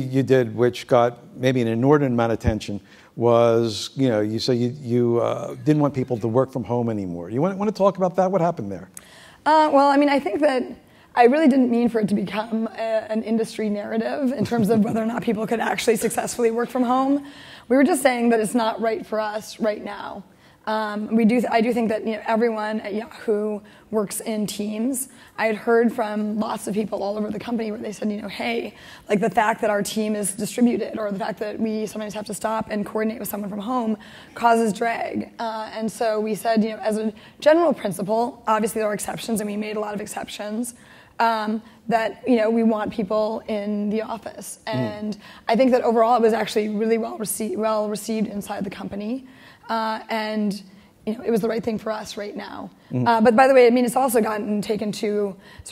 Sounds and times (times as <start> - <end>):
Female speech, woman speaking: 9.5 - 55.7.